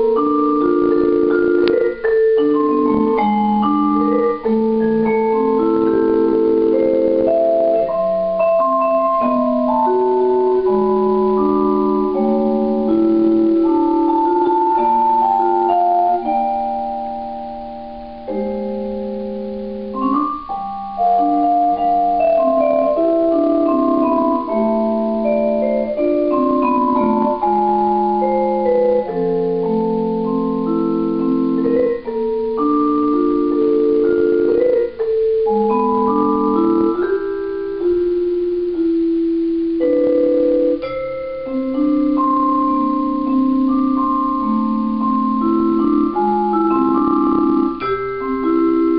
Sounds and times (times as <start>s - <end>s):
Vibraphone: 0.0s - 19.1s, 20.0s - 39.0s, 39.8s - 48.9s
Marimba, xylophone: 0.0s - 48.9s.